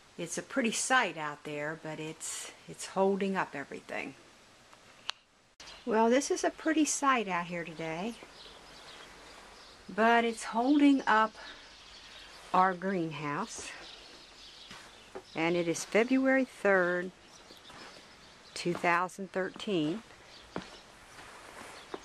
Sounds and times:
Speech: 0.2s - 4.2s, 5.8s - 8.2s, 9.9s - 11.6s, 12.5s - 13.8s, 15.4s - 17.2s, 18.6s - 20.0s.

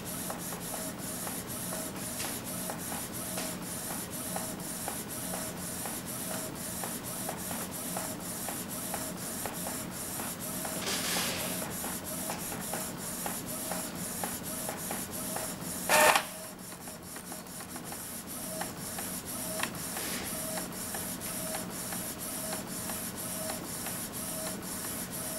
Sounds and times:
Printer: 0.0s - 25.3s.

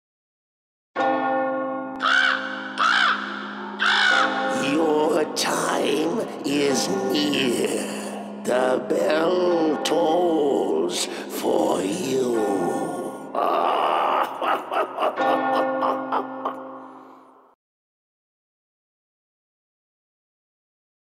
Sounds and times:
Speech: 4.5s - 14.3s.

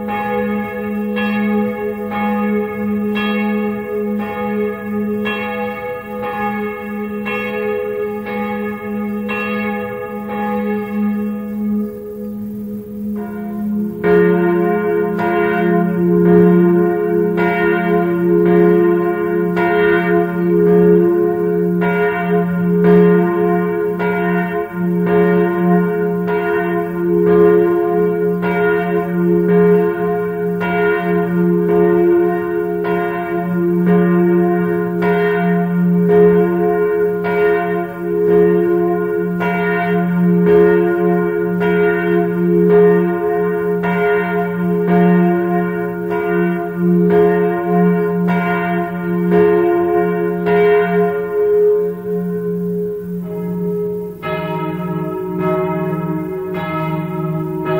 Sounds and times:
Church bell: 0.0s - 57.7s.

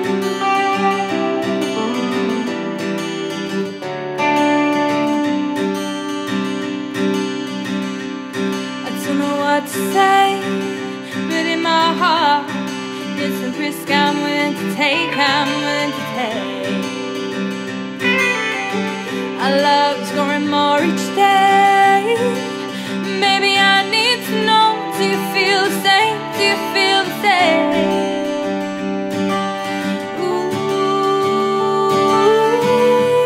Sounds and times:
Music: 0.0s - 33.2s.

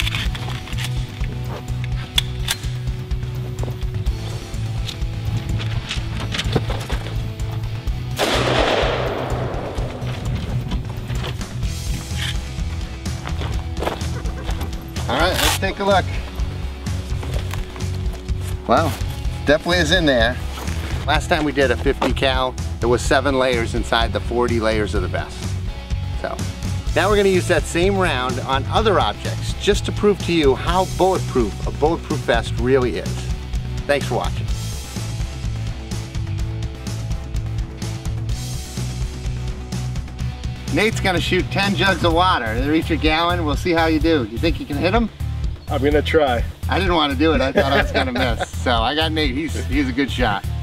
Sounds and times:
Music: 0.0s - 50.6s.

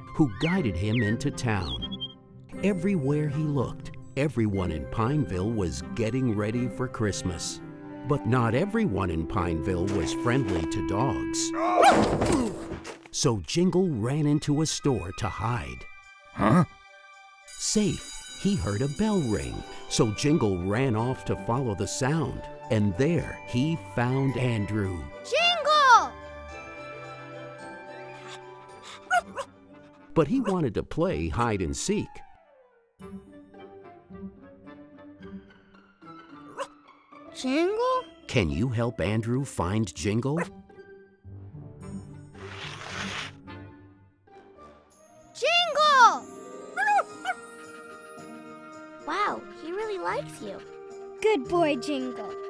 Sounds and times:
Music: 0.0s - 52.5s
Speech: 0.2s - 1.8s, 2.6s - 11.6s, 13.2s - 15.8s, 17.6s - 26.1s, 30.2s - 32.2s, 37.4s - 40.5s, 51.2s - 52.4s.

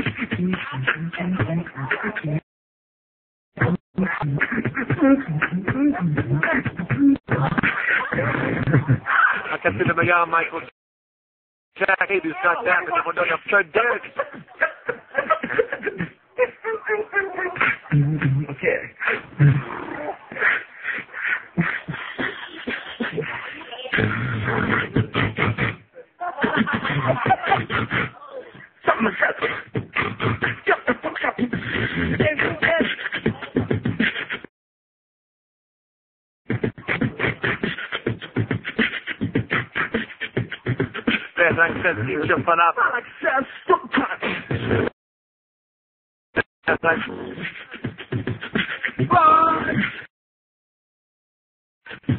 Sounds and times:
Beatboxing: 0.0s - 2.4s, 3.6s - 10.5s, 13.8s - 34.5s, 36.5s - 42.7s, 43.6s - 45.0s, 46.7s - 50.1s, 51.9s - 52.1s.

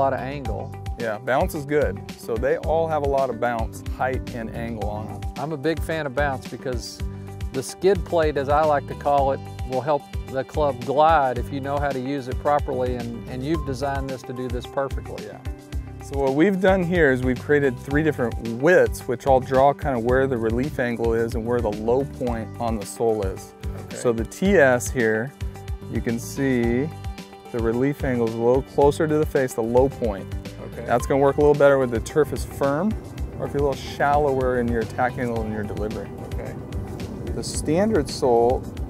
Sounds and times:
Speech: 0.0s - 7.0s, 7.6s - 25.3s, 25.9s - 26.9s, 27.5s - 36.6s, 37.4s - 38.6s
Music: 0.0s - 38.8s.

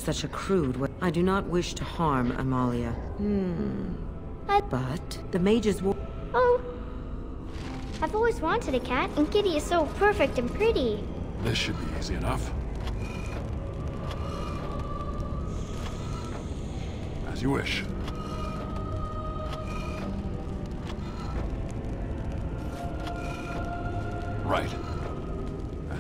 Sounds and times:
Music: 0.0s - 26.0s.

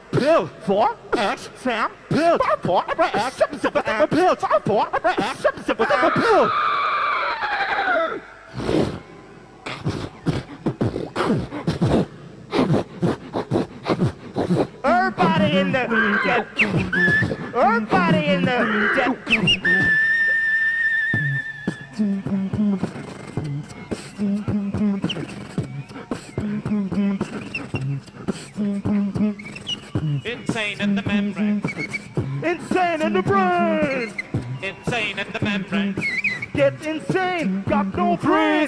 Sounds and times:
Beatboxing: 0.0s - 6.4s, 8.5s - 9.0s, 9.6s - 38.6s
Inside, large room or hall: 0.0s - 38.6s.

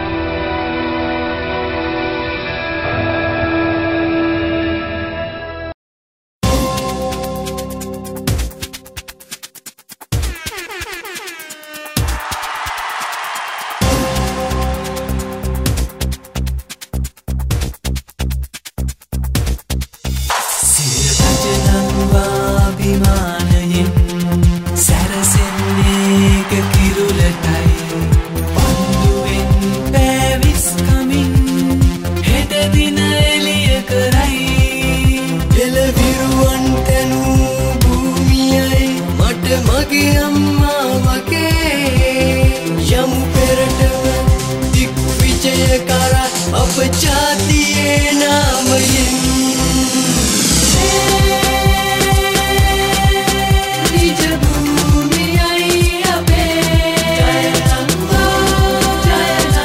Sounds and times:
Exciting music: 10.2s - 17.1s, 20.0s - 59.6s.

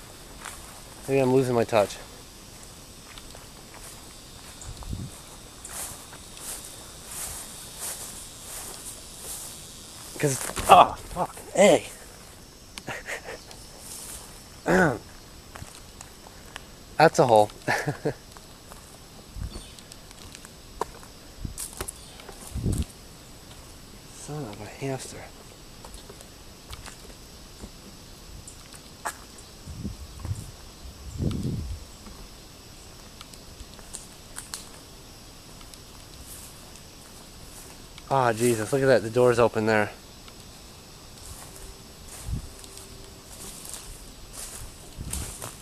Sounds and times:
Outside, rural or natural: 0.0s - 45.6s
Speech: 1.1s - 2.1s, 10.2s - 12.0s, 17.0s - 17.5s, 24.2s - 25.3s, 38.1s - 40.0s.

